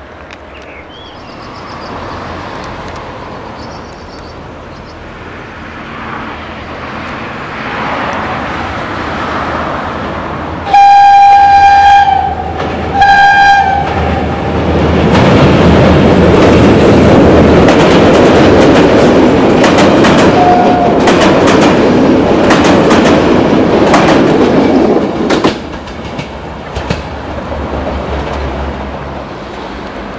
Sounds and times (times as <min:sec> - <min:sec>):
Railroad car, train wagon: 0:00.0 - 0:30.1
Train: 0:00.0 - 0:30.1.